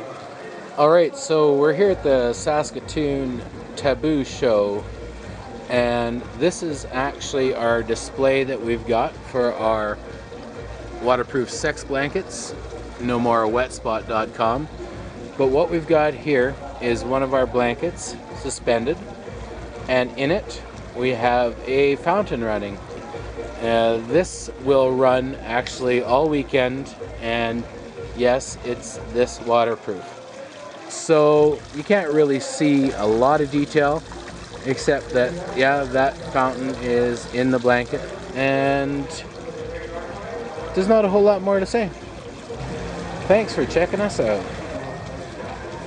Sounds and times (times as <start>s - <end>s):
Water: 0.0s - 45.8s.